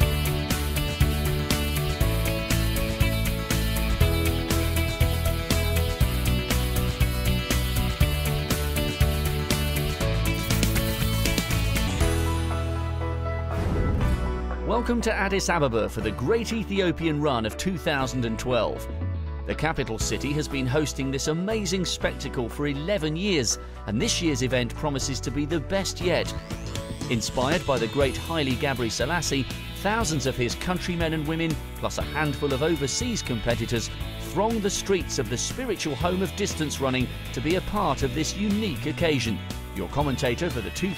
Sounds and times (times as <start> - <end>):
Music: 0.0 - 40.9
Speech: 14.7 - 18.9, 19.5 - 26.4, 27.1 - 40.9.